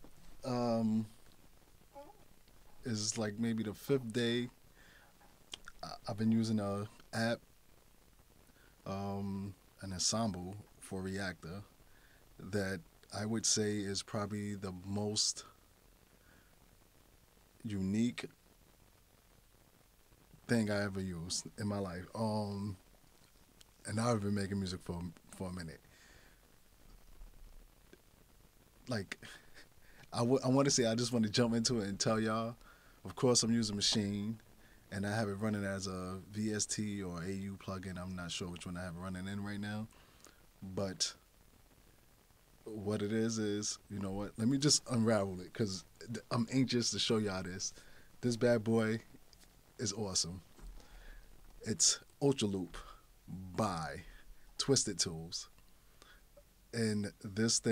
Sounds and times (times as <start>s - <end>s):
Speech: 0.4s - 1.2s, 2.8s - 4.6s, 5.6s - 7.4s, 8.9s - 11.7s, 12.4s - 15.6s, 17.6s - 18.3s, 20.5s - 22.8s, 23.8s - 25.8s, 28.9s - 29.4s, 30.1s - 39.9s, 40.6s - 41.2s, 42.7s - 49.1s, 49.8s - 50.4s, 51.6s - 55.5s, 56.8s - 57.7s.